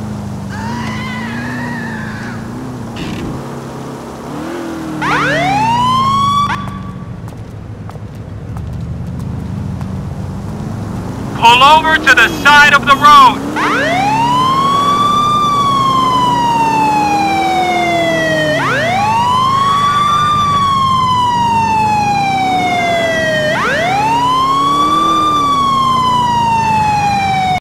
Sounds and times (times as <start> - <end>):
Police car (siren): 0.5 - 2.5, 5.0 - 7.1, 11.4 - 27.6.